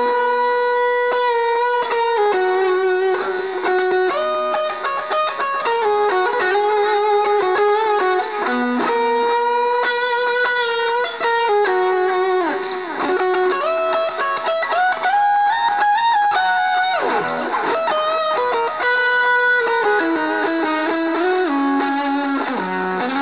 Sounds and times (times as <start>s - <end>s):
Effects unit: 0.0s - 23.2s
Guitar: 0.0s - 23.2s.